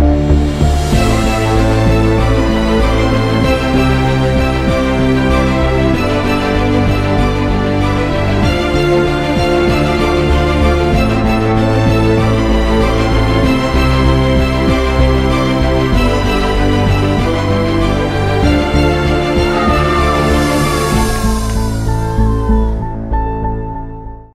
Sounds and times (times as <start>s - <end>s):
Music: 0.0s - 24.3s.